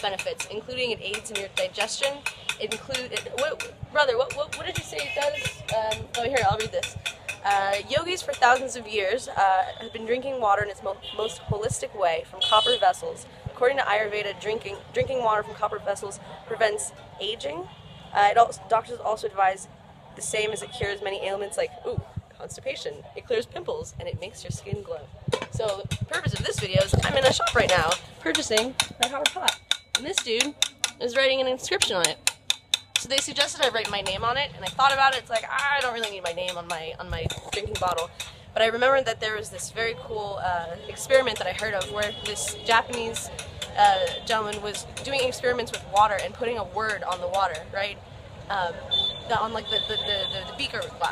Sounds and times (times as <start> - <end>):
Speech: 0.0 - 19.6, 20.2 - 32.2, 33.0 - 51.1.